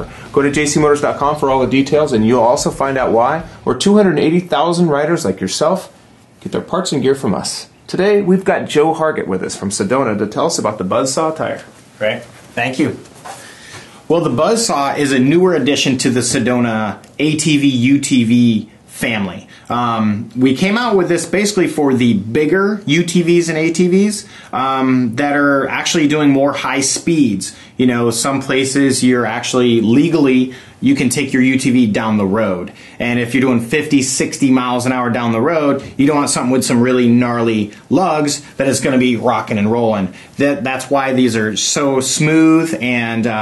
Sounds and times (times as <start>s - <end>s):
Speech: 0.0s - 13.1s, 14.1s - 43.4s.